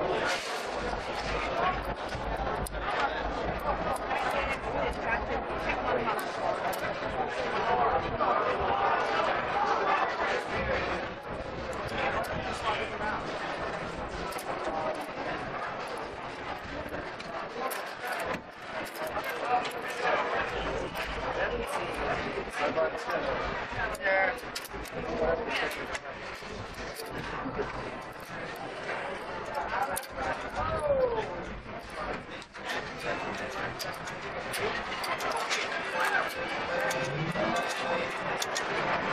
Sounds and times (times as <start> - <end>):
Speech: 0.0 - 39.1.